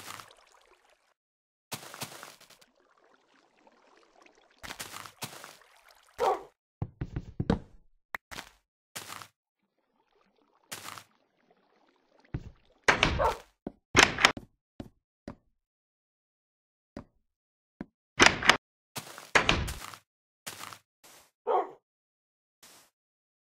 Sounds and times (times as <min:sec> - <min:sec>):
Bow-wow: 0:06.2 - 0:06.6, 0:13.2 - 0:13.5, 0:21.5 - 0:21.8.